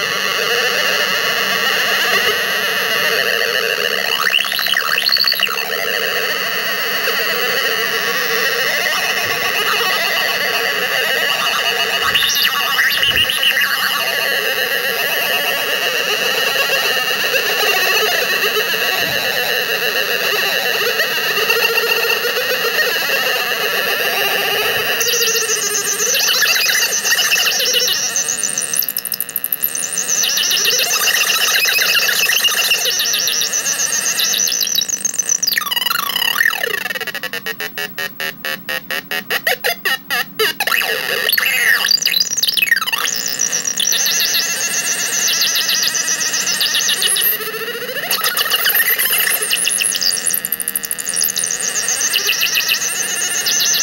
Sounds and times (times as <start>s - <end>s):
Cacophony: 0.0s - 53.8s.